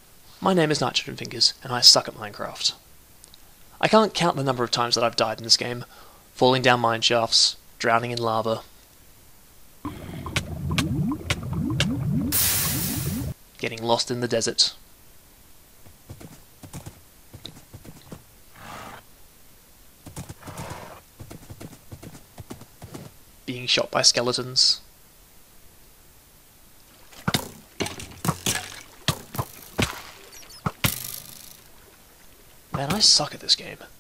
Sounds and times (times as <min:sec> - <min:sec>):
Speech: 0:00.4 - 0:02.8, 0:03.8 - 0:08.7, 0:13.6 - 0:14.8, 0:23.5 - 0:24.9, 0:32.8 - 0:34.0.